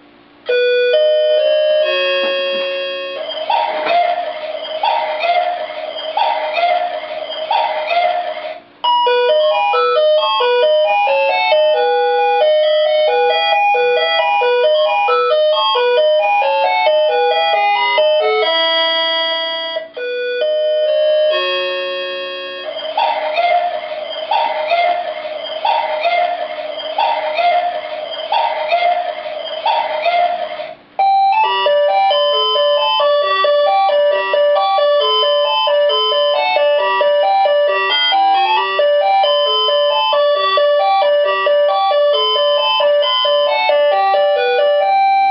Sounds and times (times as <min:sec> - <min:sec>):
Music: 0:07.9 - 0:22.9, 0:30.6 - 0:45.3.